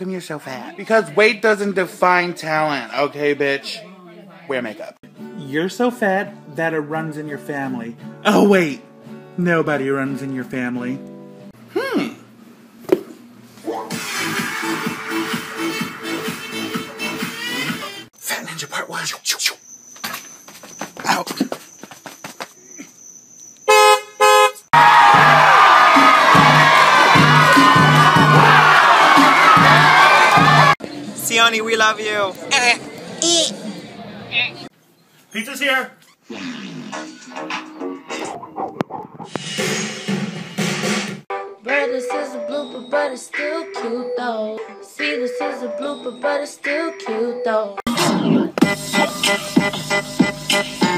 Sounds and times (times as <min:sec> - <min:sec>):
Music: 0:05.0 - 0:11.5, 0:13.7 - 0:18.1, 0:24.8 - 0:32.1, 0:36.9 - 0:50.9.